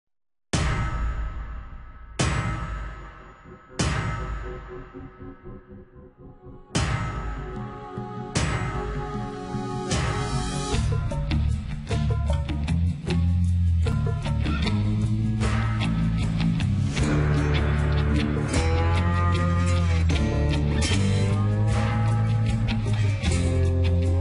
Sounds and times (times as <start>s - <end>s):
Music: 0.6s - 24.2s.